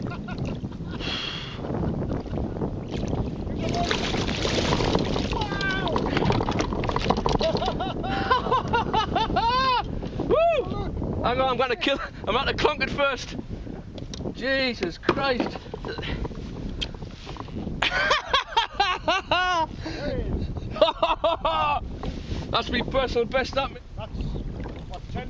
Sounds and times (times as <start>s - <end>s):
Rowboat, canoe, kayak: 0.0s - 25.2s.